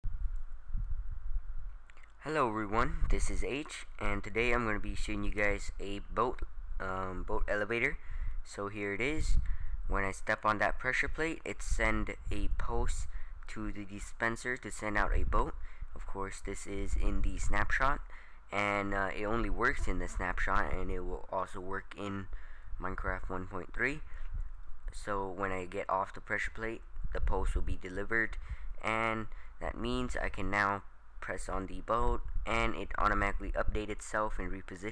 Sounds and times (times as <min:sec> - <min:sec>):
Speech: 0:02.2 - 0:24.1, 0:24.9 - 0:34.9.